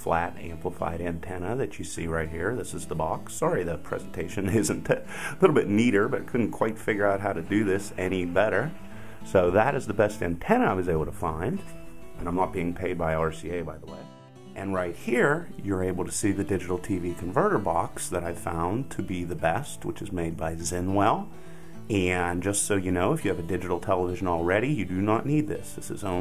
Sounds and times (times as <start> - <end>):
Speech: 0.0 - 21.3, 21.9 - 26.2
Music: 0.0 - 26.2.